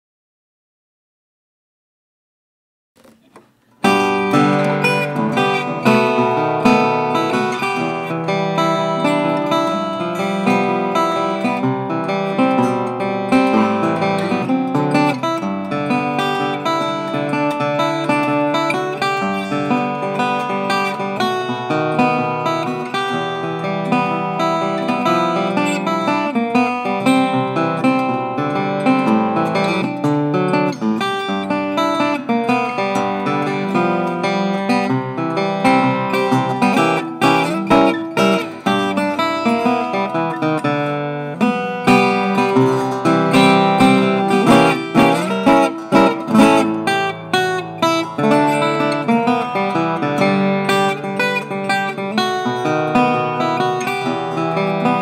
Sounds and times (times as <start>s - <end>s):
Music: 3.0s - 55.0s.